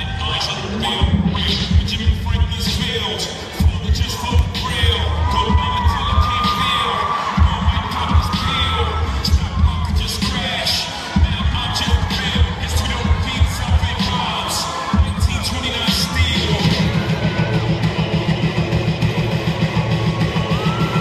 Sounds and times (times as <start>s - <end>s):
Music: 0.0s - 21.0s.